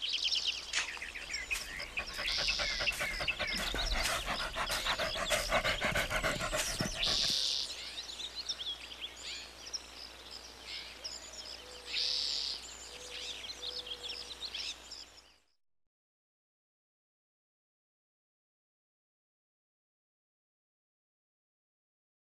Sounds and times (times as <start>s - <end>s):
Chirp, tweet: 0.0s - 15.6s
Environmental noise: 0.0s - 15.6s
Outside, rural or natural: 0.0s - 15.6s.